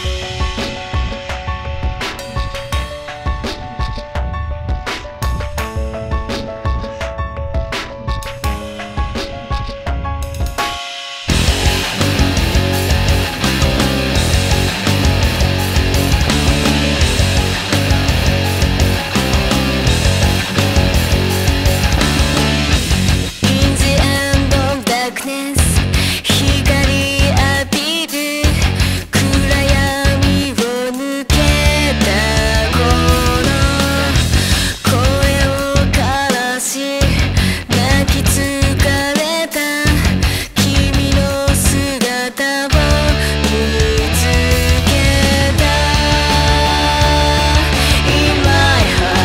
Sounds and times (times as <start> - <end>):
Music: 0.0 - 49.2.